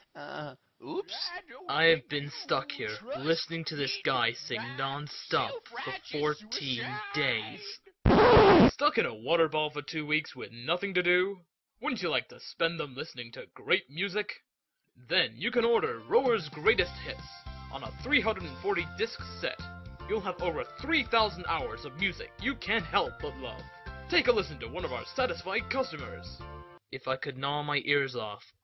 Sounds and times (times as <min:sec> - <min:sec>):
Speech: 0:00.2 - 0:07.9, 0:08.7 - 0:14.4, 0:15.0 - 0:26.4, 0:27.0 - 0:28.6
Music: 0:15.4 - 0:26.8.